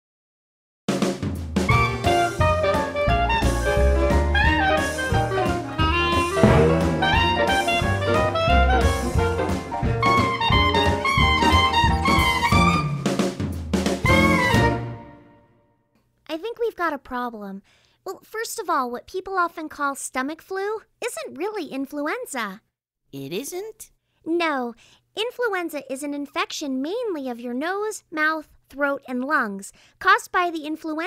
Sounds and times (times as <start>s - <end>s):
Jazz: 1.7s - 13.3s.